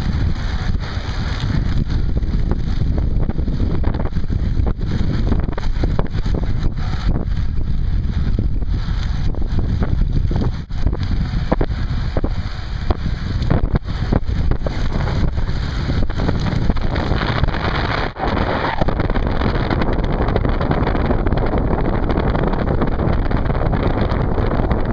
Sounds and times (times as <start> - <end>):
Bicycle: 0.0 - 24.9.